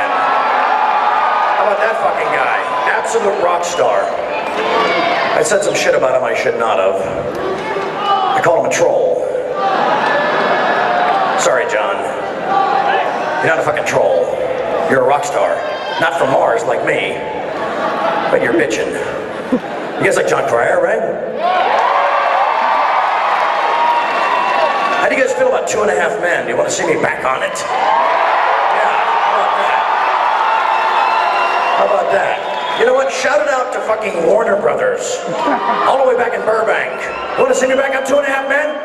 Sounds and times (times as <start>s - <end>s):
Speech: 1.6s - 4.2s, 4.8s - 9.5s, 11.4s - 12.2s, 12.9s - 17.3s, 18.3s - 19.2s, 20.0s - 21.2s, 25.0s - 27.7s, 31.8s - 38.8s.